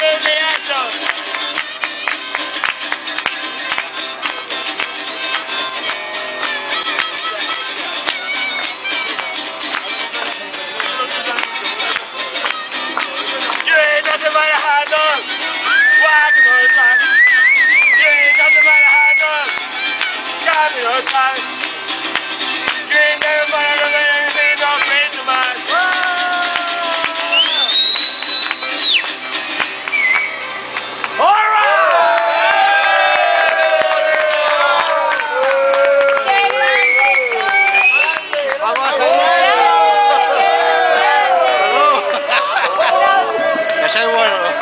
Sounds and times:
Male speech, man speaking: 0.0s - 1.0s, 13.3s - 15.2s, 16.0s - 17.0s, 18.0s - 19.5s, 20.5s - 21.4s, 38.0s - 39.7s, 43.8s - 44.6s
Chatter: 0.0s - 31.3s, 33.8s - 44.6s
Crowd: 0.0s - 44.6s.

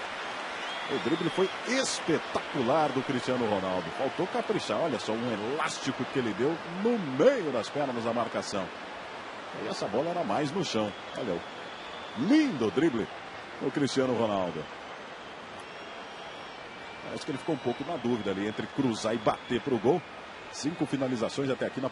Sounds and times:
Speech: 0.9s - 8.7s, 9.6s - 11.4s, 12.2s - 14.6s, 17.1s - 21.9s.

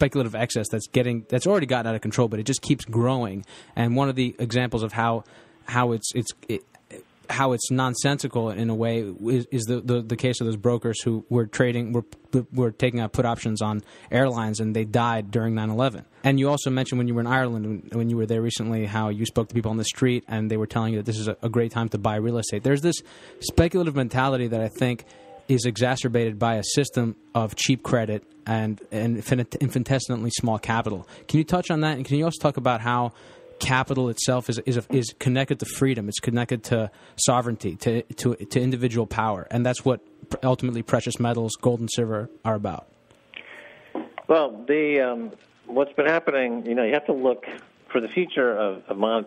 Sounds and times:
Speech: 0.0s - 42.9s, 44.0s - 49.2s.

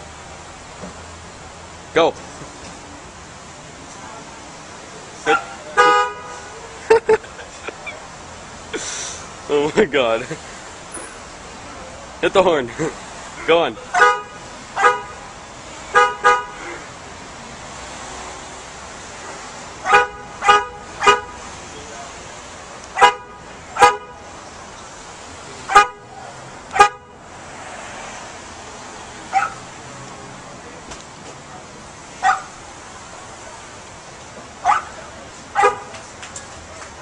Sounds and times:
Vehicle horn, car horn, honking: 5.8s - 6.6s, 14.0s - 15.2s, 15.8s - 16.6s, 19.9s - 21.4s, 23.0s - 24.2s, 25.7s - 26.2s.

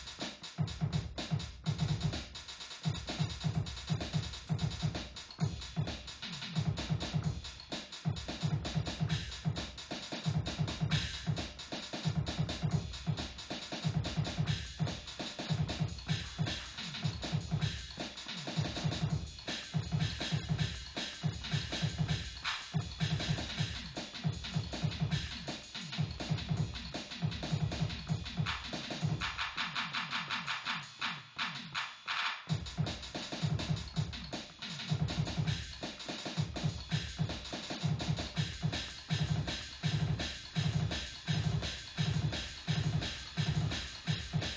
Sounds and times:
Drum machine: 0.0s - 44.5s.

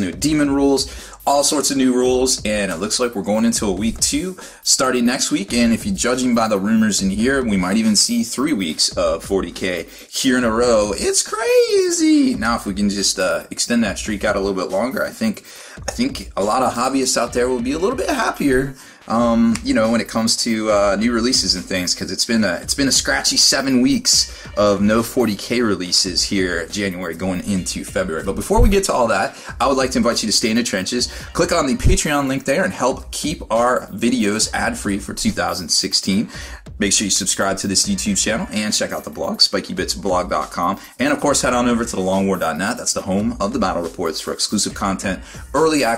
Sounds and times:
Music: 0.0s - 45.9s
Speech: 0.0s - 45.9s.

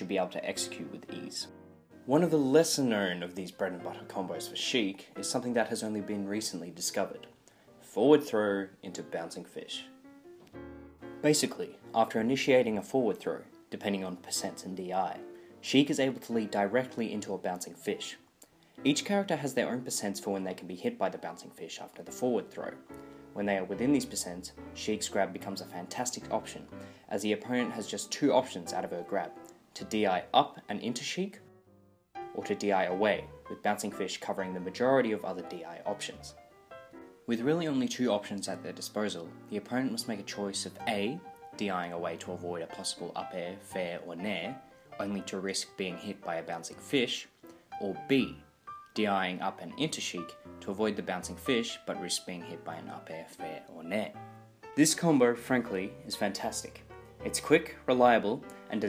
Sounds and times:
Speech: 0.0s - 1.5s, 2.1s - 10.0s, 11.2s - 18.2s, 18.8s - 22.8s, 23.4s - 31.4s, 32.3s - 36.4s, 37.3s - 48.4s, 49.0s - 54.2s, 54.8s - 58.8s
Music: 0.0s - 58.8s.

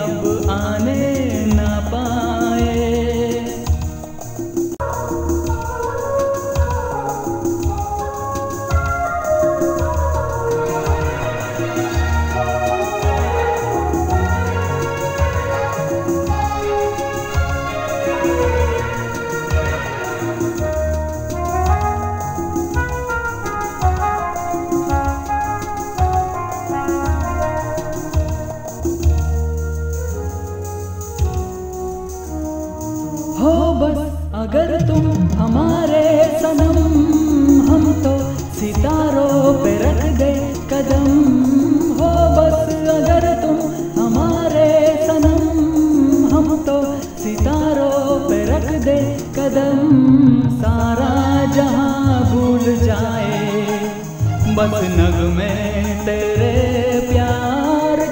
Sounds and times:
Music of Bollywood: 0.0s - 58.1s.

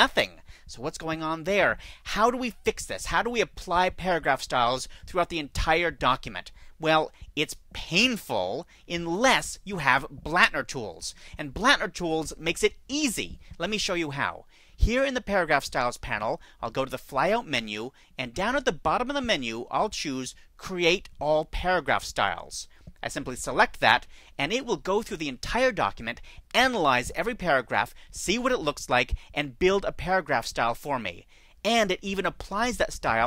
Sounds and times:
Speech: 0.0s - 33.2s.

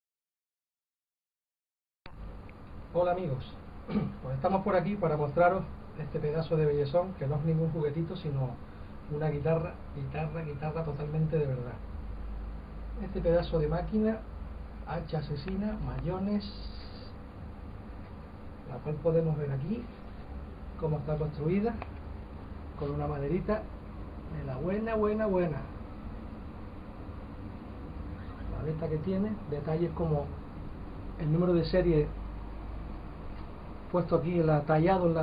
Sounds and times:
Speech: 2.9s - 11.8s, 13.0s - 14.3s, 14.9s - 17.1s, 18.7s - 20.0s, 20.8s - 21.9s, 22.8s - 23.7s, 24.3s - 25.8s, 28.4s - 30.4s, 31.2s - 32.2s, 33.9s - 35.2s.

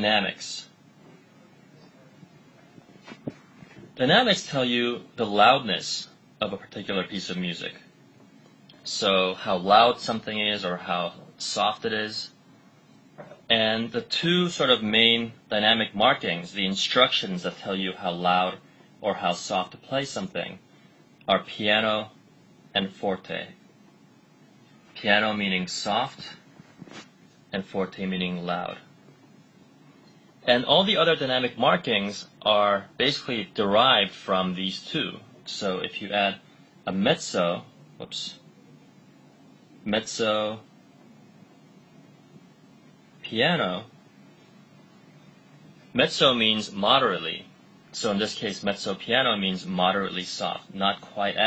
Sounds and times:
Speech: 0.0s - 0.8s, 4.0s - 7.9s, 8.8s - 12.4s, 13.2s - 20.6s, 21.3s - 23.6s, 25.0s - 26.5s, 27.5s - 28.9s, 30.4s - 38.5s, 39.8s - 40.7s, 43.2s - 44.0s, 45.9s - 51.4s.

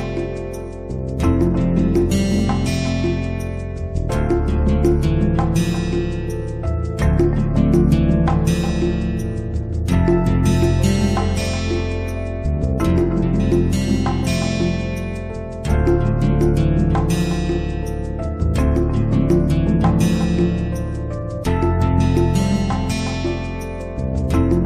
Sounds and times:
Music: 0.0s - 24.6s.

